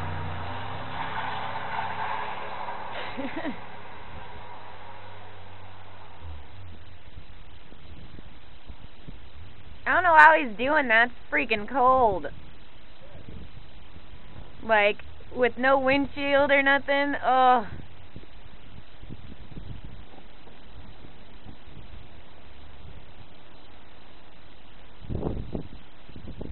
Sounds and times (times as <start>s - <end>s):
Car: 0.0s - 26.5s
Speech: 9.9s - 12.3s, 14.6s - 17.7s.